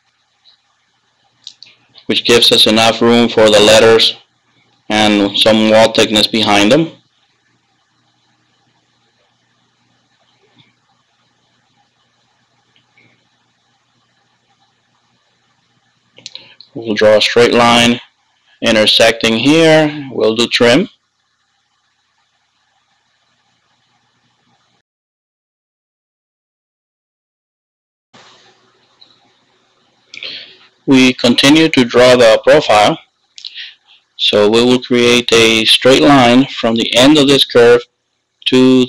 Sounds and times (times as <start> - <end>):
Speech: 1.5 - 4.2, 4.9 - 7.0, 16.3 - 20.9, 30.2 - 37.8, 38.4 - 38.8.